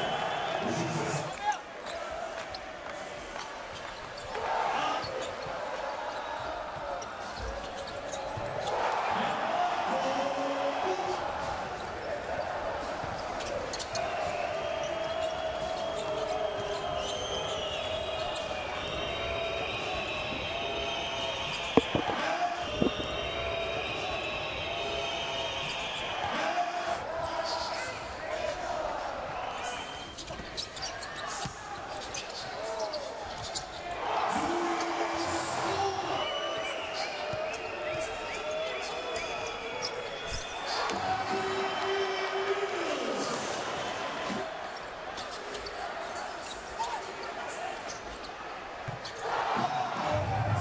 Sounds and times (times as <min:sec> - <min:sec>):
Speech: 0:08.7 - 0:13.6, 0:30.8 - 0:44.6.